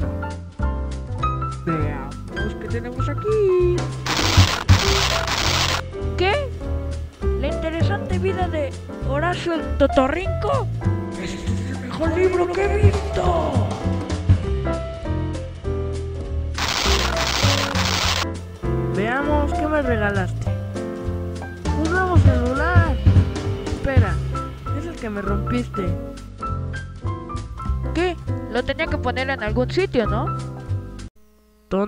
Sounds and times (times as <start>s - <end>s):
Music: 0.0s - 31.4s
Speech: 1.7s - 3.9s, 6.2s - 6.5s, 7.4s - 13.9s, 19.0s - 20.5s, 21.7s - 23.0s, 23.8s - 26.0s, 28.0s - 30.3s.